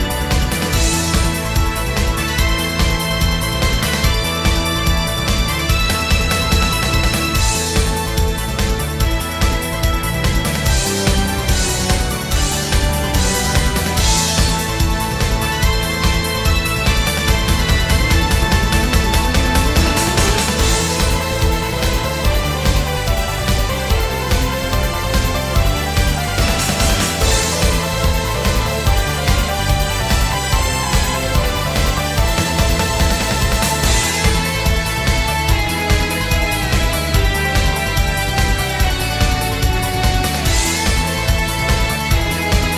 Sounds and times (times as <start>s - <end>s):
Exciting music: 0.0s - 42.7s
Pop music: 0.0s - 42.7s
Theme music: 0.0s - 42.7s
Video game music: 0.0s - 42.7s.